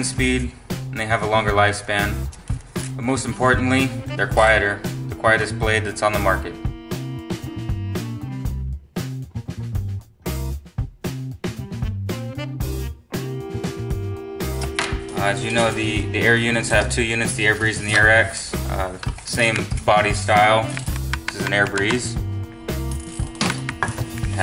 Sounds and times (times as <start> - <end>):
Speech: 0.0 - 2.2, 3.0 - 6.6, 15.2 - 22.2
Music: 0.0 - 24.4.